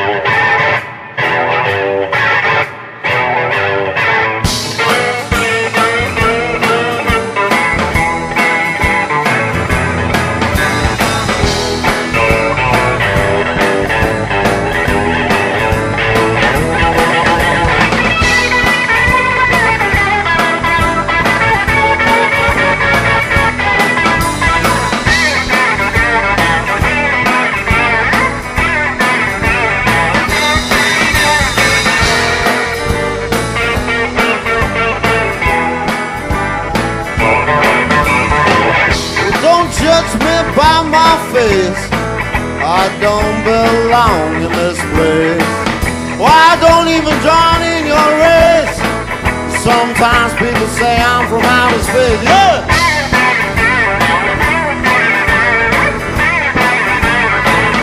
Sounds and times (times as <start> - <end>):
Ska: 0.0 - 57.8.